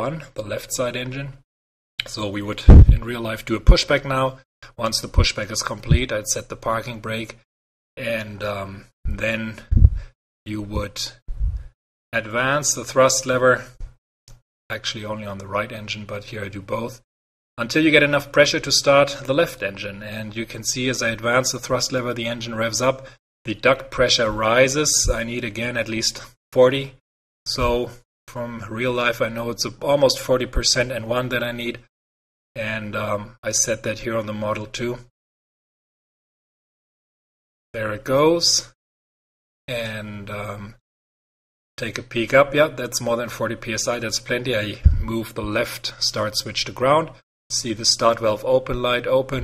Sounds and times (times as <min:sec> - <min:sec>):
Speech: 0:00.0 - 0:01.4, 0:02.0 - 0:09.9, 0:10.5 - 0:11.2, 0:12.2 - 0:13.9, 0:14.7 - 0:31.9, 0:32.6 - 0:35.1, 0:37.8 - 0:38.8, 0:39.7 - 0:40.8, 0:41.8 - 0:49.4
Inside, small room: 0:00.0 - 0:31.9, 0:32.6 - 0:35.2, 0:37.8 - 0:38.8, 0:41.8 - 0:49.4.